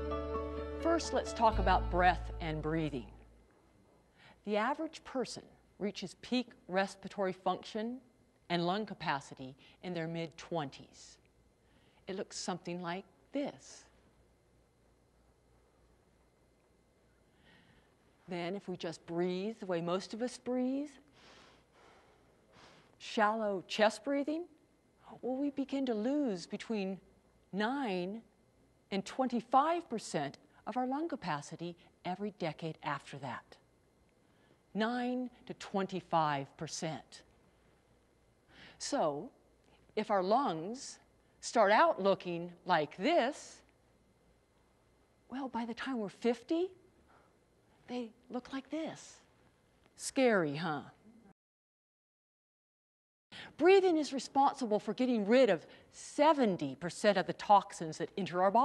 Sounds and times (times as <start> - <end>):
Speech: 0.8 - 3.2, 4.4 - 11.2, 12.1 - 13.9, 18.3 - 21.1, 23.0 - 28.3, 28.9 - 33.6, 34.8 - 37.3, 38.8 - 39.4, 40.0 - 43.7, 45.3 - 46.8, 47.9 - 49.3, 50.0 - 51.0, 53.6 - 58.6.